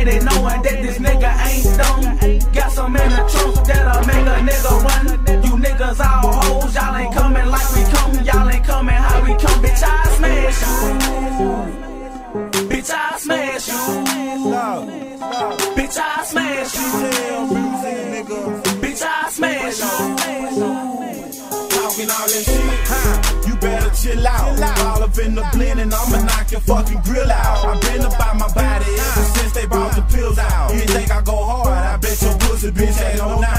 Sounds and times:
Music: 0.0 - 33.5.

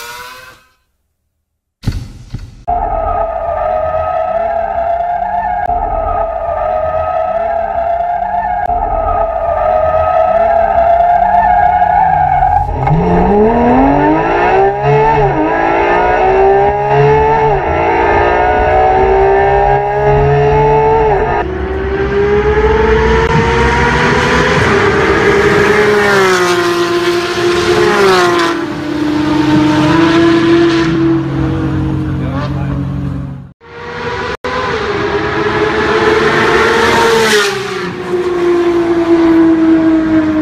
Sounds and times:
Speech: 32.1 - 32.9.

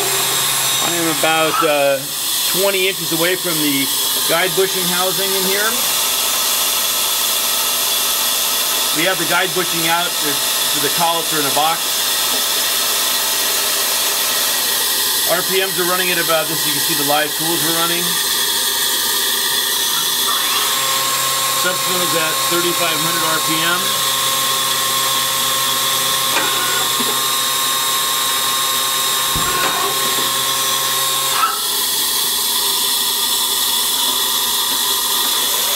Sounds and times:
Speech: 0.8 - 5.9, 8.9 - 11.9, 15.3 - 18.2, 21.6 - 24.0.

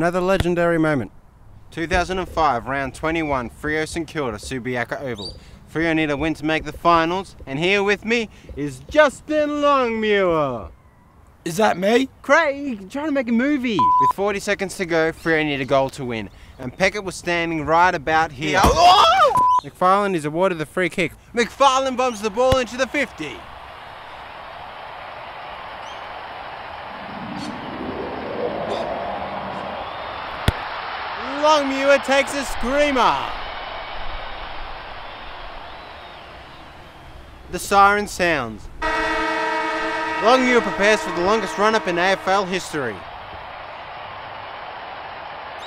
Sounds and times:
Speech: 1.8 - 10.7, 11.5 - 19.0, 19.6 - 23.4, 31.2 - 33.4, 37.5 - 38.6, 40.2 - 43.0.

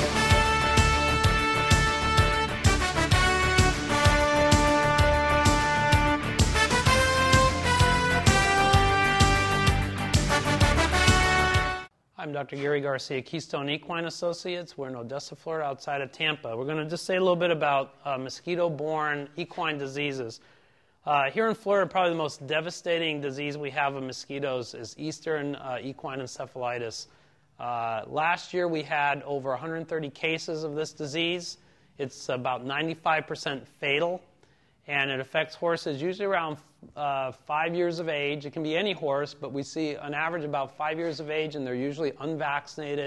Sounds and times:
Speech: 12.2 - 20.4, 21.0 - 34.3, 34.9 - 43.0.

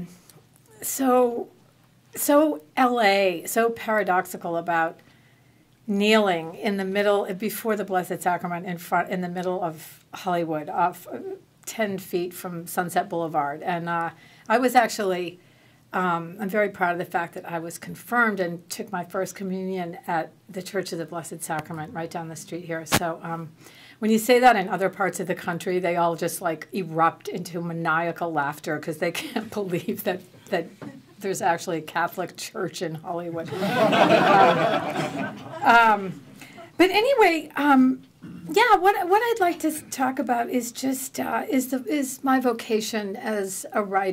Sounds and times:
Speech: 0.8 - 1.5, 2.2 - 5.0, 5.9 - 15.4, 16.0 - 33.5, 35.6 - 36.2, 36.8 - 44.1.

